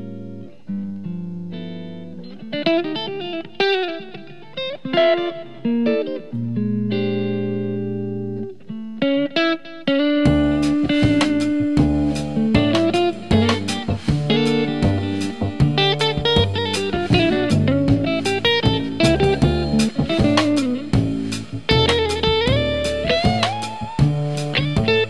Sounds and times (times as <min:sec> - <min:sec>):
Electric guitar: 0:00.0 - 0:25.1.